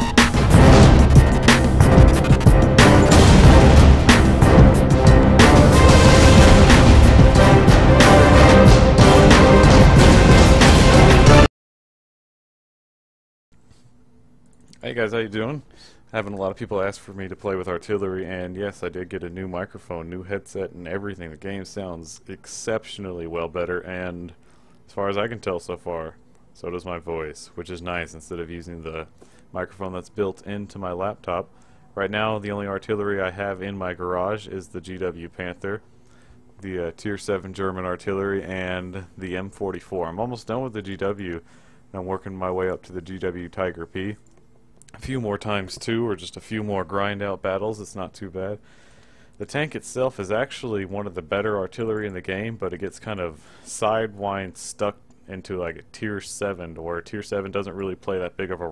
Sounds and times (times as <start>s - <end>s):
Speech: 14.8s - 35.8s, 36.6s - 44.2s, 44.9s - 48.6s, 49.4s - 58.7s.